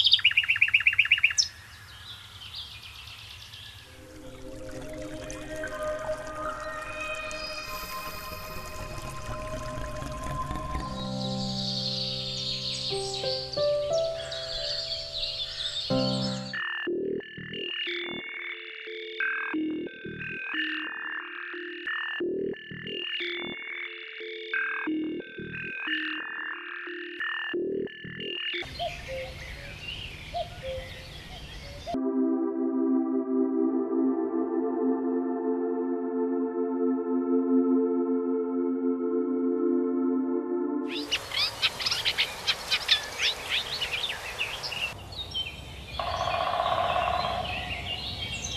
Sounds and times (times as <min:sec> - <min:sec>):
New-age music: 0:03.8 - 0:29.4, 0:31.9 - 0:45.0.